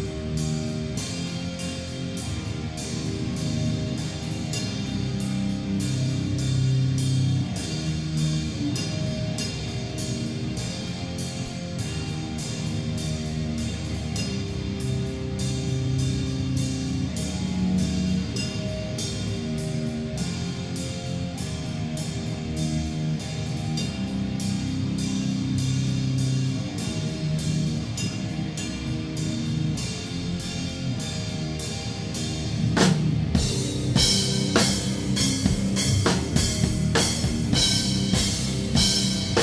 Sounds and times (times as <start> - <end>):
Drum kit: 0.0 - 39.4.